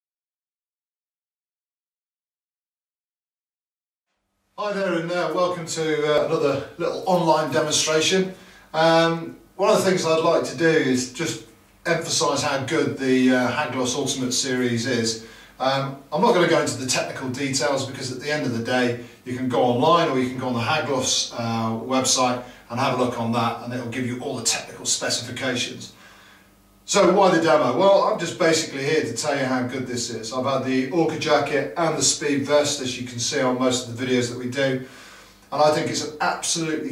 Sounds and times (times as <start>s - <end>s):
Speech: 4.6s - 26.0s, 26.9s - 34.9s, 35.5s - 36.9s.